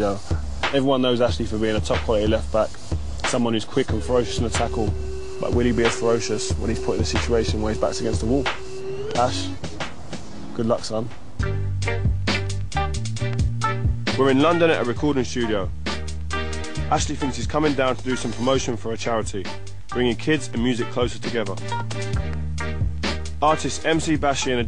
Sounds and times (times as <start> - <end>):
Speech: 0.0 - 8.5, 9.1 - 9.6, 10.6 - 11.2, 14.1 - 15.7, 16.9 - 21.6, 23.4 - 24.6
Music: 0.0 - 24.6.